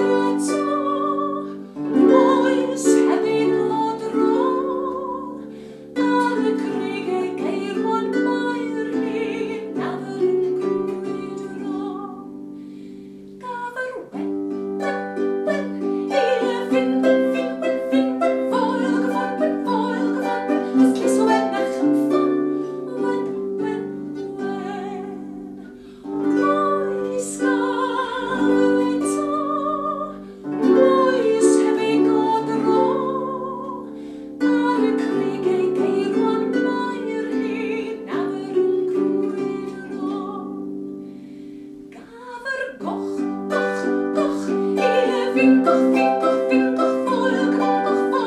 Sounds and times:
Music: 0:00.0 - 0:48.2.

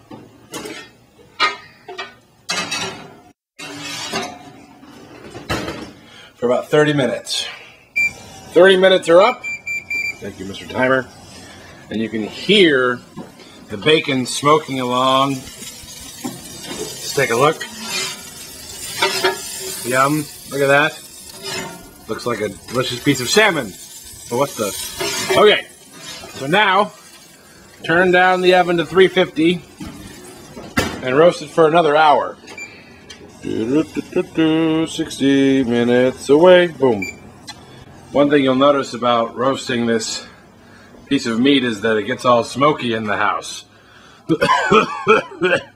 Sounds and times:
Speech: 0:06.4 - 0:07.6, 0:08.6 - 0:09.4, 0:10.2 - 0:11.1, 0:11.9 - 0:13.0, 0:13.7 - 0:15.4, 0:17.1 - 0:17.6, 0:19.8 - 0:21.0, 0:22.1 - 0:25.7, 0:26.3 - 0:27.0, 0:27.8 - 0:29.6, 0:31.0 - 0:32.4, 0:33.4 - 0:37.1, 0:38.1 - 0:40.3, 0:41.1 - 0:43.7.

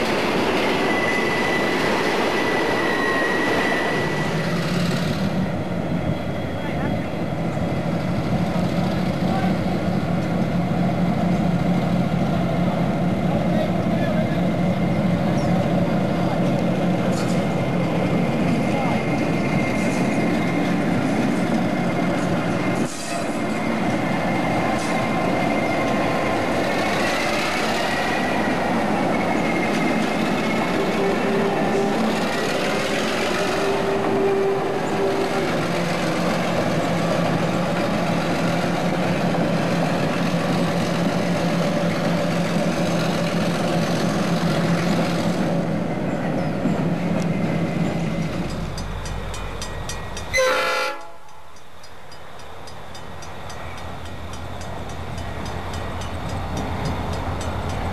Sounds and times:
Railroad car, train wagon: 0:00.0 - 0:57.9
Train: 0:00.0 - 0:57.9.

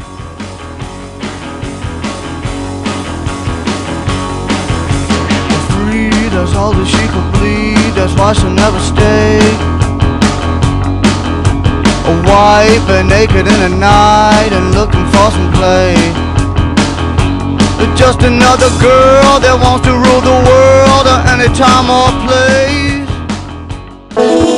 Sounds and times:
Music: 0:00.0 - 0:24.5.

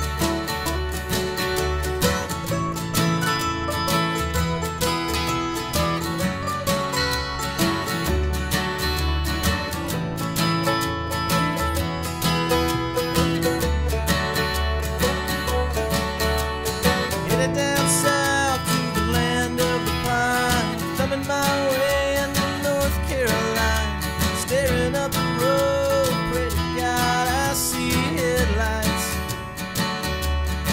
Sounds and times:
Music: 0:00.0 - 0:30.7.

